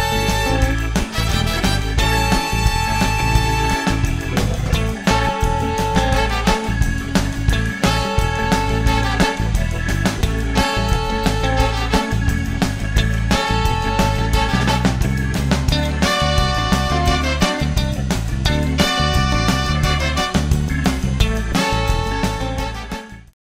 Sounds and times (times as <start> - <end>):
Music: 0.0 - 23.4.